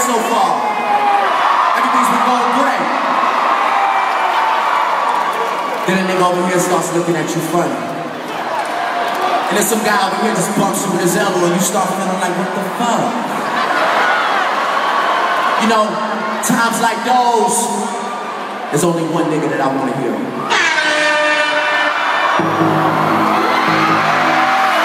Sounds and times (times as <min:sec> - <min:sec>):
Speech: 0:00.0 - 0:00.7, 0:01.8 - 0:03.0, 0:05.9 - 0:07.9, 0:09.5 - 0:13.3, 0:15.6 - 0:18.1, 0:18.7 - 0:20.3
Crowd: 0:00.0 - 0:24.8
Music: 0:20.6 - 0:24.8.